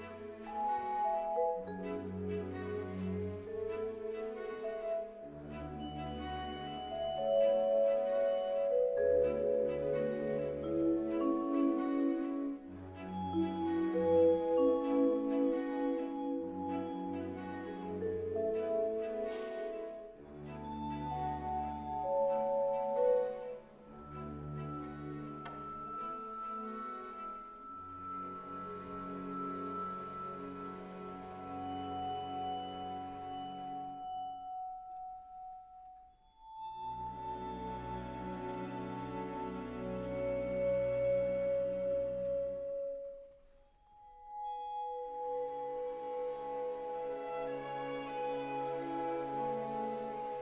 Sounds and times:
Orchestra: 0.0 - 50.4
Vibraphone: 5.8 - 20.1, 21.3 - 37.5, 40.2 - 46.9.

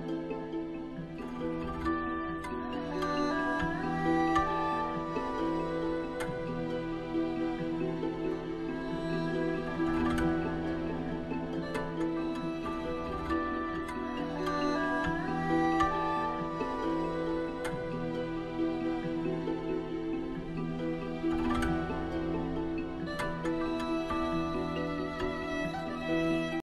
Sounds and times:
Music: 0.0 - 26.6.

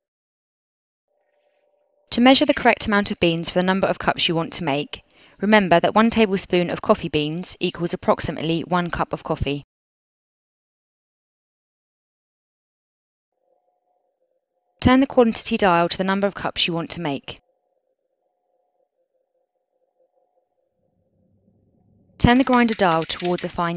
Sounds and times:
Speech: 2.1 - 9.7, 14.8 - 17.4, 22.2 - 23.7.

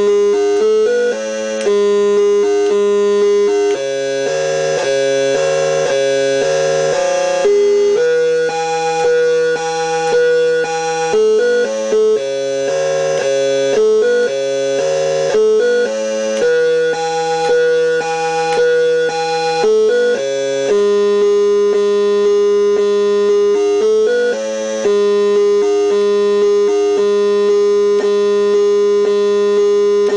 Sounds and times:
Inside, small room: 0.0 - 30.1.

